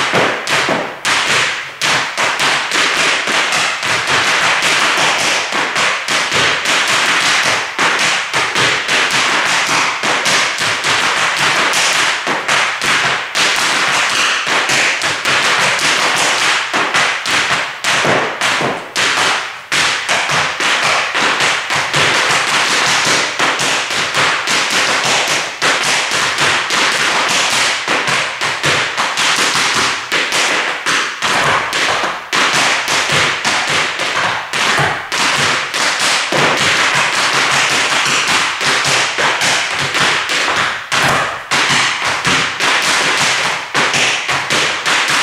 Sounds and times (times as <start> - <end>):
Tap: 0.0 - 45.2.